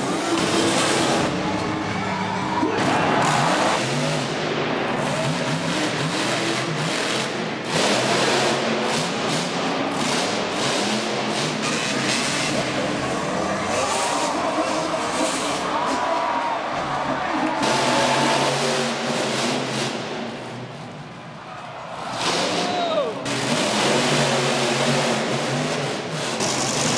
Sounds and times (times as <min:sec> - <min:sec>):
Truck: 0:00.0 - 0:26.9.